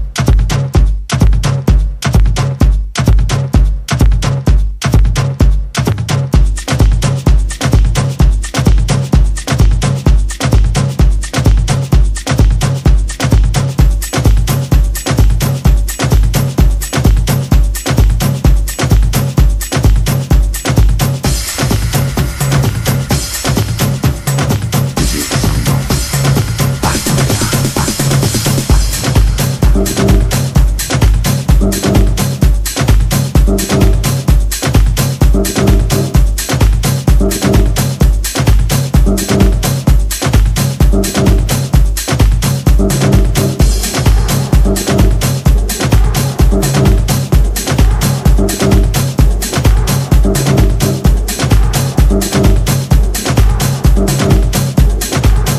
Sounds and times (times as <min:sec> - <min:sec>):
Music: 0:00.0 - 0:55.5.